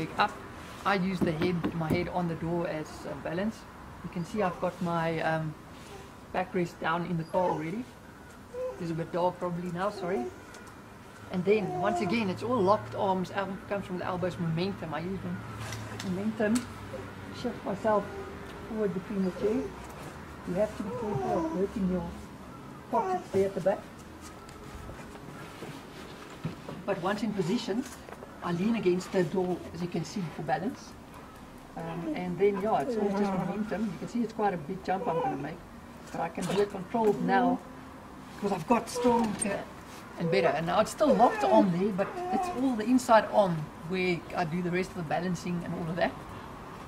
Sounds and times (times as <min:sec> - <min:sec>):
Speech: 0:00.0 - 0:05.6, 0:06.3 - 0:07.9, 0:08.8 - 0:10.4, 0:11.3 - 0:15.4, 0:26.9 - 0:31.0, 0:31.8 - 0:37.7, 0:38.4 - 0:46.2.